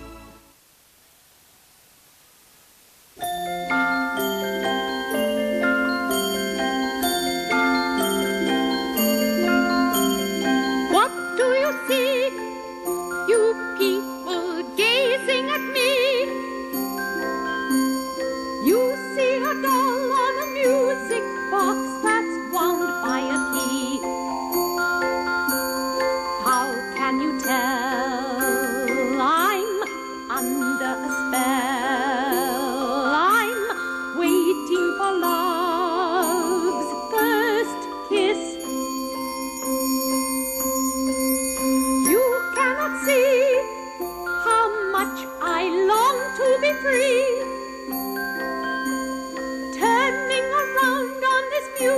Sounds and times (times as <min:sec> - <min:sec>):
Music: 0:00.0 - 0:00.7, 0:03.2 - 0:51.9.